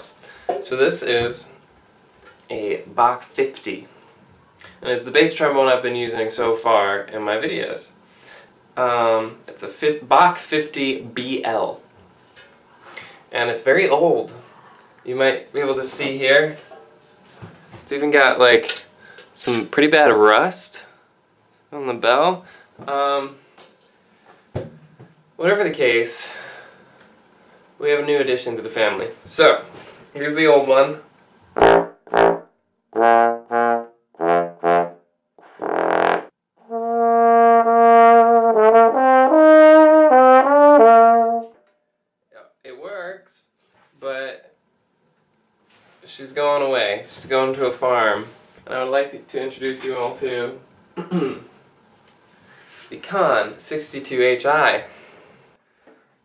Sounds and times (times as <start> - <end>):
Trombone: 31.6 - 41.6.